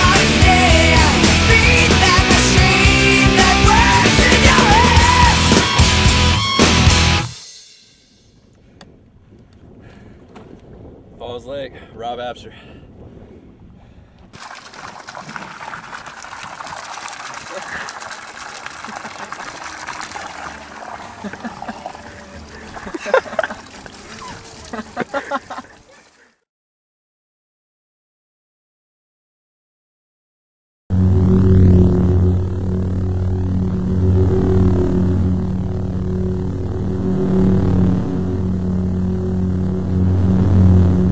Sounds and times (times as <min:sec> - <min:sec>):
Music: 0:00.0 - 0:08.4
Outside, rural or natural: 0:00.0 - 0:26.5, 0:30.9 - 0:41.1
Speech: 0:11.2 - 0:12.6.